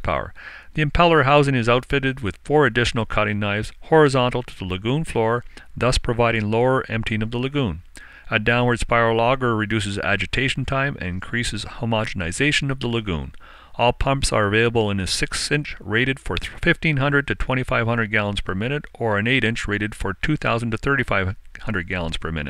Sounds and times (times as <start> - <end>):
Speech: 0.0 - 22.4.